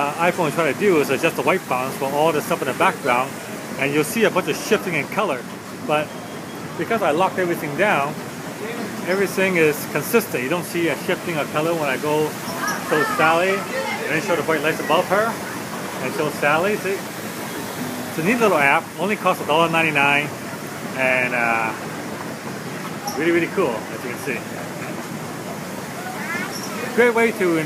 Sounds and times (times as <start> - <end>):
Speech: 0.0 - 6.1, 6.8 - 15.4, 16.0 - 17.0, 18.2 - 20.3, 21.0 - 21.8, 23.1 - 24.4, 26.7 - 27.6
Waterfall: 0.0 - 27.6.